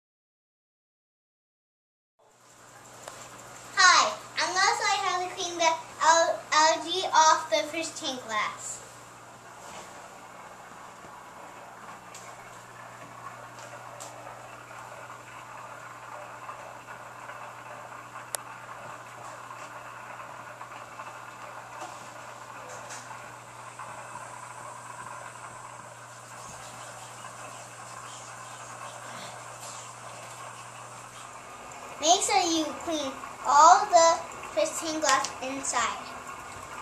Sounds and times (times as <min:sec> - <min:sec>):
Speech: 0:03.8 - 0:08.8, 0:32.0 - 0:36.2.